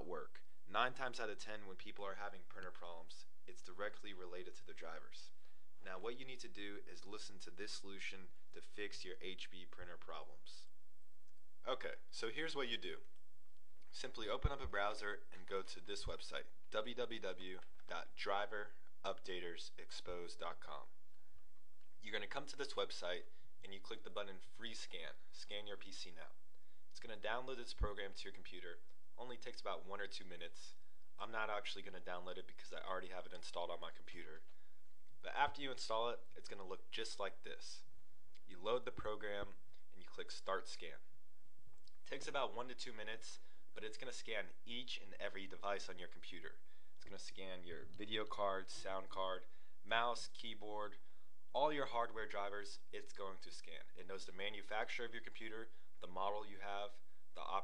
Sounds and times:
Speech: 0.0s - 10.7s, 11.6s - 13.1s, 13.9s - 21.0s, 22.0s - 26.4s, 27.0s - 34.5s, 35.2s - 37.9s, 38.5s - 41.1s, 42.0s - 57.6s.

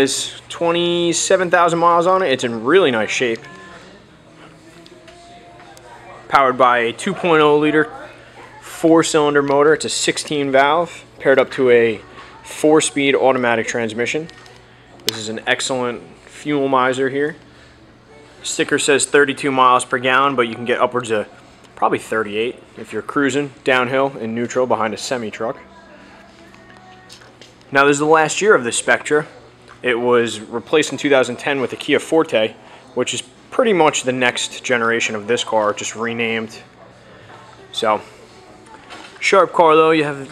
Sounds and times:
Speech: 0.0s - 4.0s, 5.1s - 14.4s, 15.1s - 17.4s, 18.4s - 26.2s, 27.7s - 36.8s, 37.5s - 40.3s.

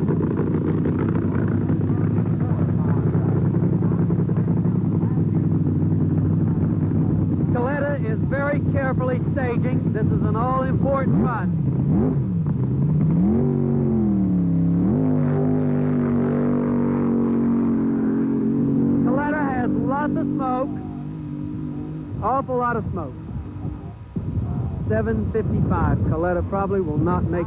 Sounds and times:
Outside, urban or manmade: 0.0s - 27.4s
Vehicle: 0.0s - 27.4s.

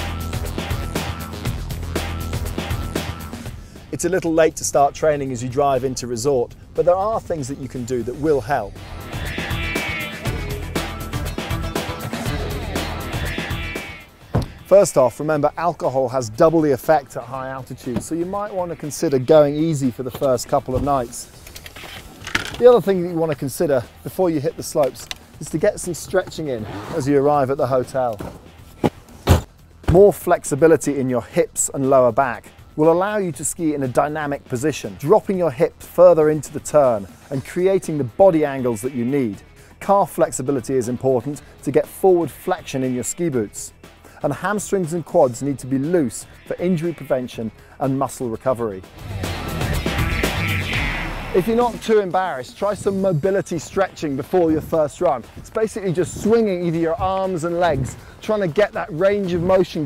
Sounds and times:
Music: 0.0s - 59.8s
Speech: 3.9s - 8.7s, 14.7s - 21.3s, 22.6s - 28.2s, 29.9s - 48.8s, 51.4s - 59.8s.

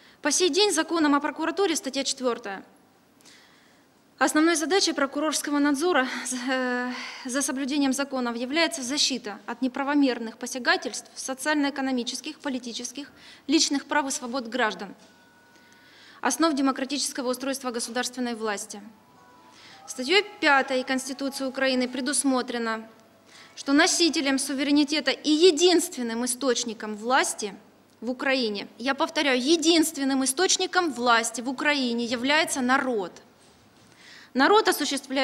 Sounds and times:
Narration, monologue: 0.0s - 35.2s
Female speech, woman speaking: 0.3s - 2.7s, 4.2s - 15.0s, 16.2s - 18.9s, 19.9s - 22.9s, 23.6s - 33.2s, 34.4s - 35.2s
Music: 18.9s - 22.4s.

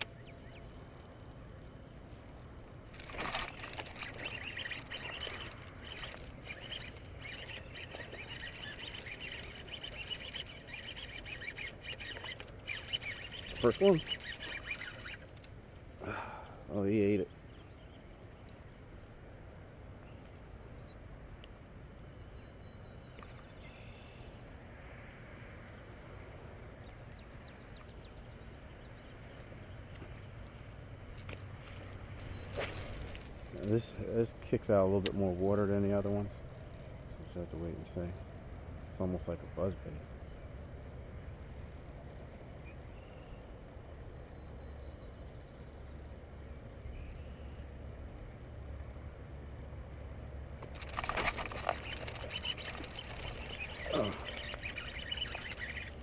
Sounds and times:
Speech: 13.6s - 14.1s, 16.7s - 17.3s, 33.6s - 36.4s, 37.2s - 38.2s, 39.0s - 40.0s.

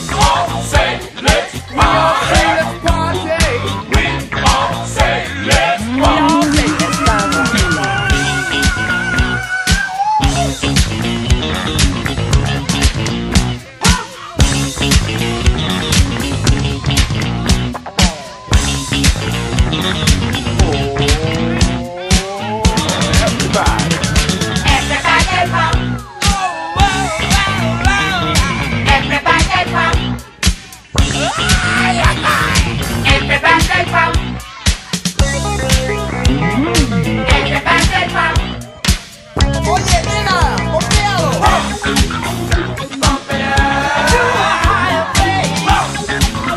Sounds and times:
Funk: 0.0s - 46.5s.

